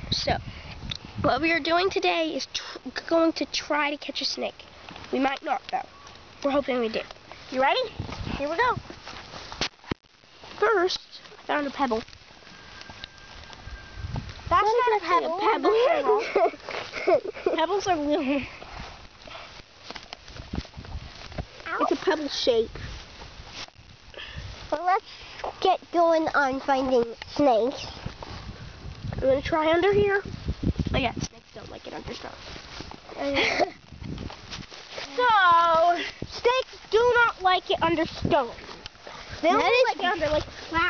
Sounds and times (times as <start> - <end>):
Speech: 35.1 - 38.6, 39.4 - 40.8.